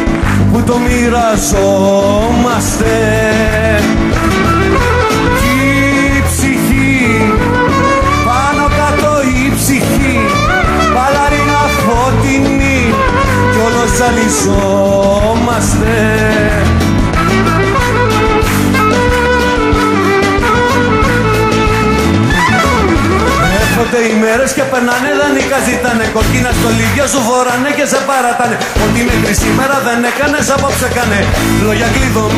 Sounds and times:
Folk music: 0.0 - 32.3
Clarinet: 4.2 - 6.2, 7.0 - 9.3, 17.2 - 24.2
Singing: 5.4 - 16.7.

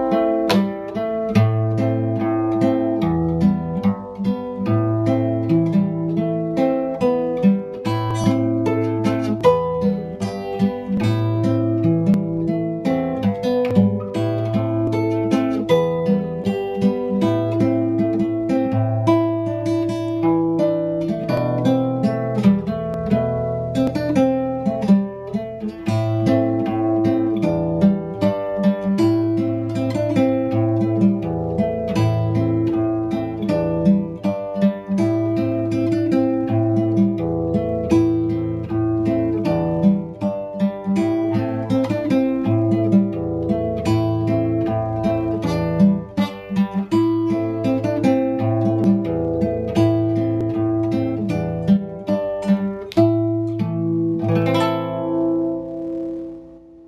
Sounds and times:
Flamenco: 0.0 - 56.8
Guitar: 0.0 - 56.8.

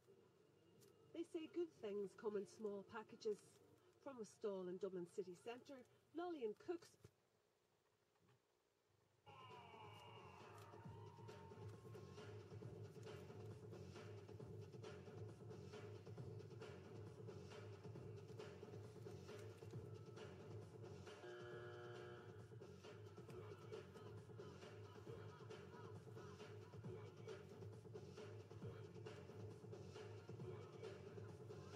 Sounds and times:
Music: 0.0 - 5.8, 9.3 - 31.7.

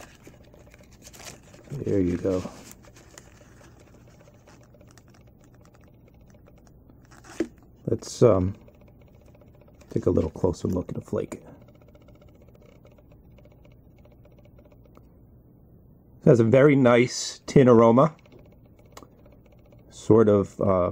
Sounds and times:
Inside, small room: 0.0 - 20.9
Speech: 1.7 - 2.6, 7.9 - 8.6, 9.9 - 11.6, 16.2 - 18.2, 19.9 - 20.9.

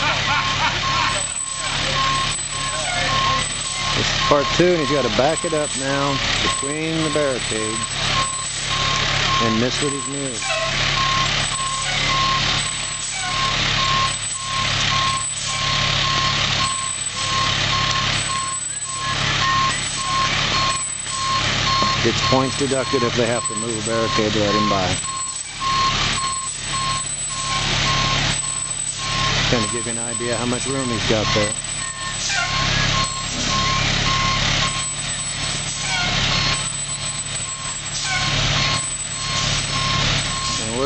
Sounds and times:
Reversing beeps: 0.4 - 40.8
Speech: 4.0 - 7.8, 9.4 - 10.4, 22.0 - 25.0, 29.5 - 31.6.

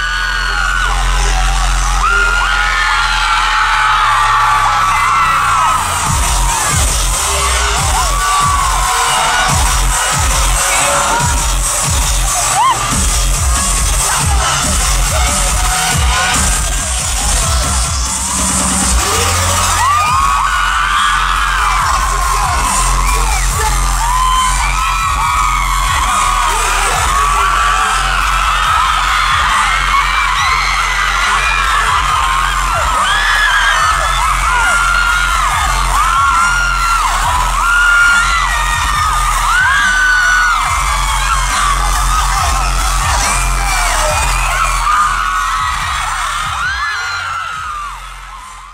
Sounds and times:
Dance music: 0.0 - 48.7.

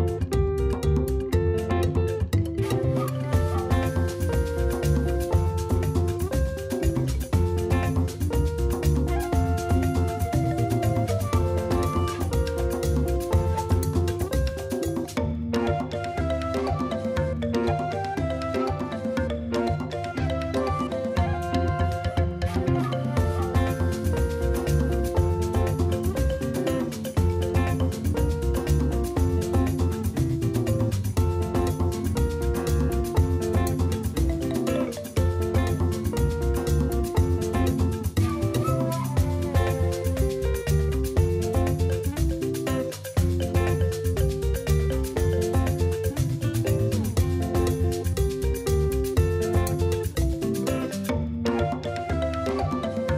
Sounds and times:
Music: 0.0 - 53.1.

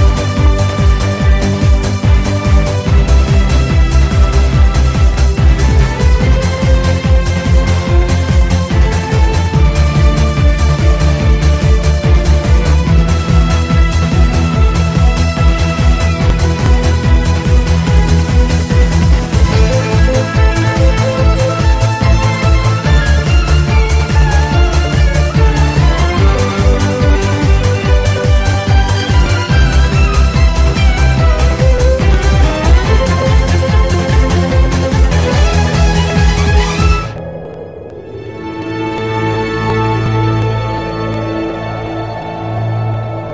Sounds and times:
Music: 0.0 - 43.3.

